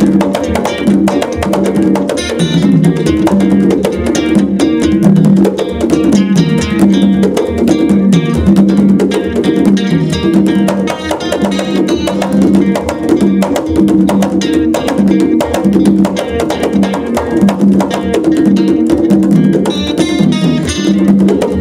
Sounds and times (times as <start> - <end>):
Percussion: 0.0 - 21.6.